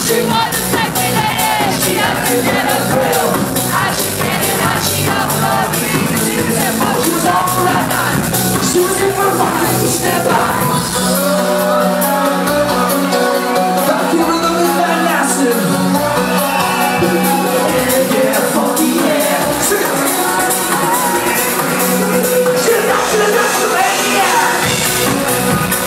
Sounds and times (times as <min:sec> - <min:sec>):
Music: 0:00.0 - 0:25.8.